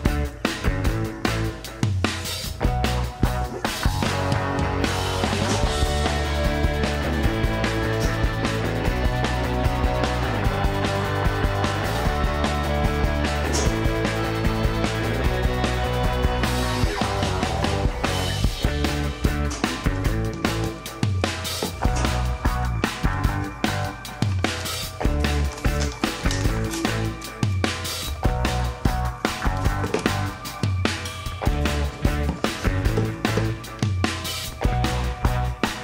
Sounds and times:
Music: 0.0s - 35.8s.

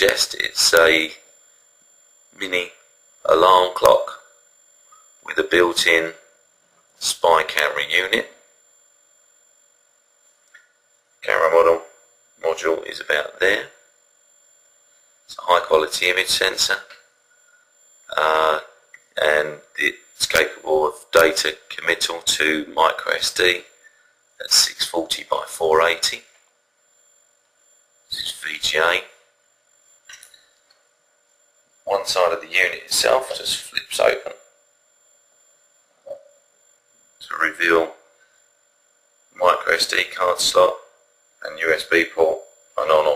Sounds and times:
Speech: 0.0s - 1.3s, 2.4s - 4.4s, 5.2s - 6.3s, 7.0s - 8.5s, 11.2s - 13.8s, 15.3s - 17.0s, 18.1s - 23.8s, 24.4s - 26.3s, 28.1s - 29.2s, 31.9s - 34.5s, 37.2s - 38.0s, 39.4s - 43.1s.

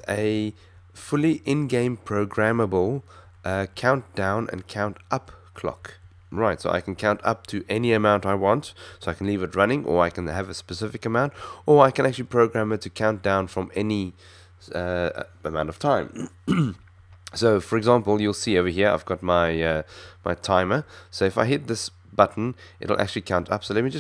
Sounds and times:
Speech: 0.0s - 16.3s, 17.3s - 24.0s.

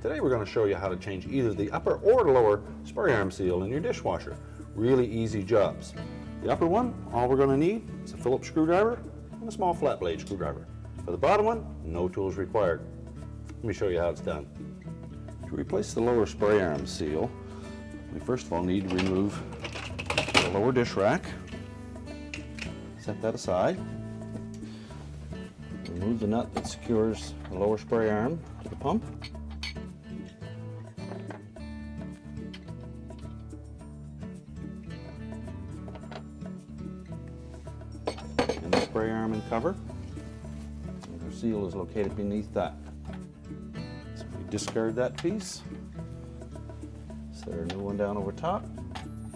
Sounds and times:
Speech: 0.0s - 12.8s, 13.6s - 14.5s, 15.5s - 17.3s, 18.1s - 19.5s, 20.4s - 21.4s, 23.0s - 23.8s, 25.9s - 29.1s, 38.6s - 39.8s, 41.1s - 42.8s, 44.2s - 45.7s, 47.3s - 48.7s
Music: 0.0s - 49.3s.

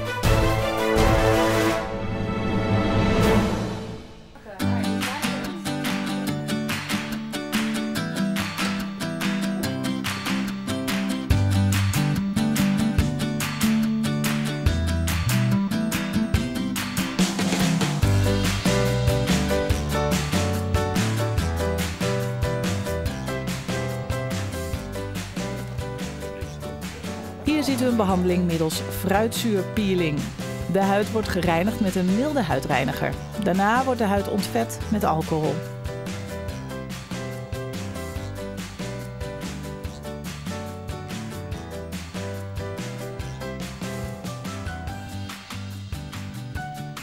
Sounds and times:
Music: 0.0s - 47.0s
Speech: 4.4s - 5.8s, 26.8s - 35.6s.

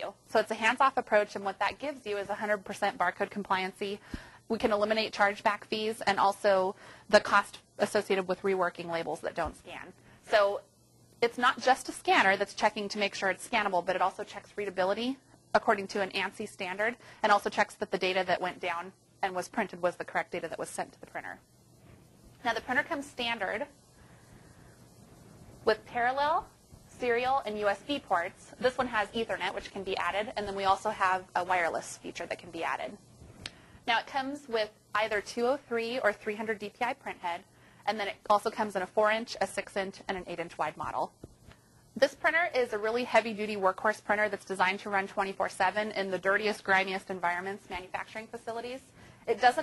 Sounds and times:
Speech: 0.0s - 21.4s, 22.4s - 23.7s, 25.7s - 33.0s, 33.9s - 41.1s, 42.0s - 49.6s.

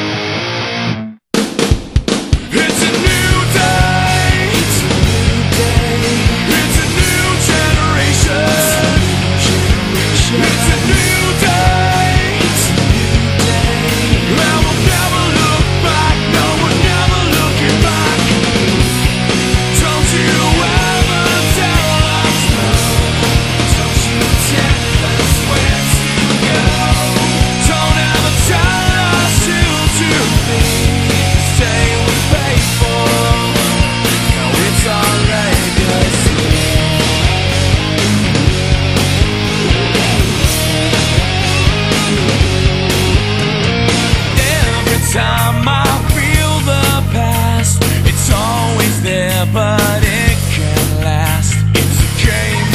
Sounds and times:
Exciting music: 0.0s - 52.7s.

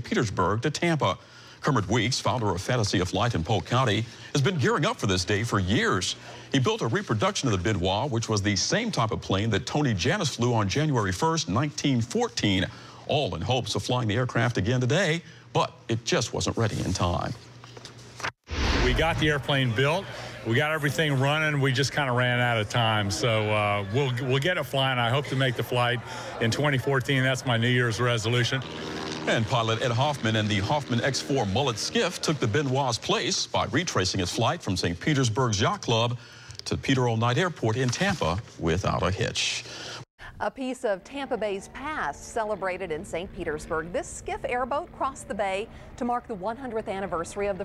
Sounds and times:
Speech: 0.0s - 17.4s, 18.8s - 39.6s, 40.4s - 47.6s
Motorboat, speedboat: 28.5s - 29.3s.

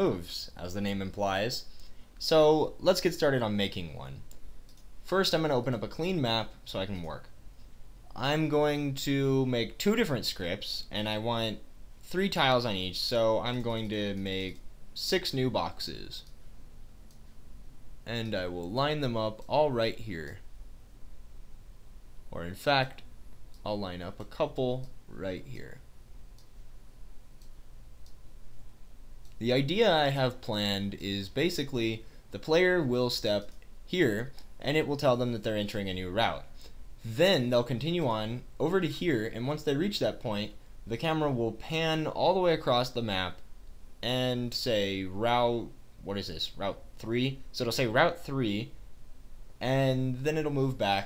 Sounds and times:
Speech: 0.0s - 4.3s, 5.0s - 7.4s, 8.1s - 16.3s, 18.0s - 20.5s, 22.3s - 25.9s, 29.4s - 43.4s, 44.0s - 48.8s, 49.6s - 51.0s.

